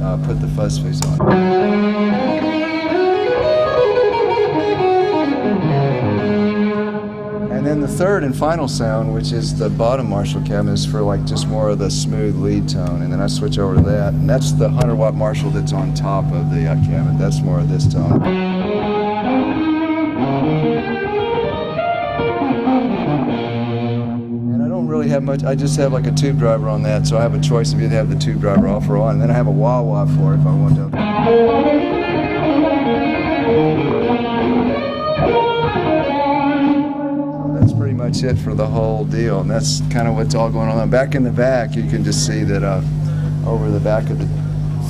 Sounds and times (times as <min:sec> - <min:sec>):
Speech: 0:00.0 - 0:01.3, 0:07.5 - 0:18.3, 0:24.5 - 0:31.0, 0:37.6 - 0:44.9
Effects unit: 0:00.0 - 0:44.9
Tapping (guitar technique): 0:01.0 - 0:08.5, 0:12.7 - 0:27.4, 0:28.4 - 0:41.7
Electric guitar: 0:01.0 - 0:41.4.